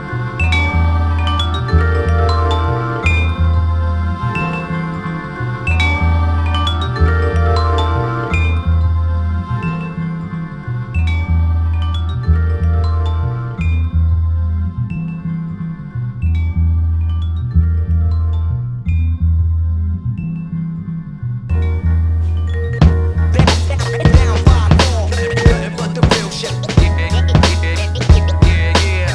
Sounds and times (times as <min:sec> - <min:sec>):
Music: 0:00.0 - 0:29.1.